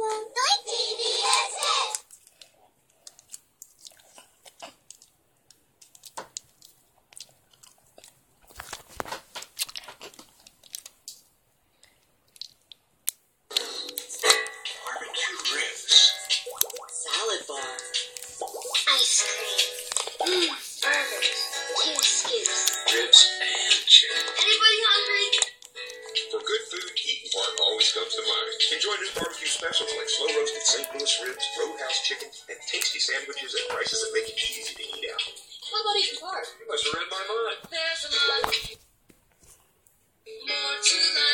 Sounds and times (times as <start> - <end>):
Speech: 0.0 - 2.0, 14.8 - 16.0, 31.2 - 38.7
Inside, small room: 0.0 - 41.3
Chewing, mastication: 1.9 - 11.2, 11.8 - 12.8, 13.5 - 24.5.